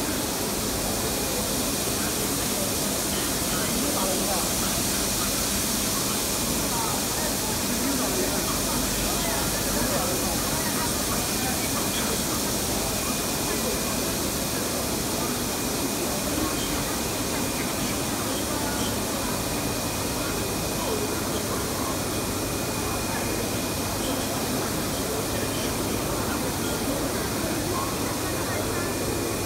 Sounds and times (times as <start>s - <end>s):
Printer: 0.0s - 29.4s
Speech: 0.0s - 29.4s.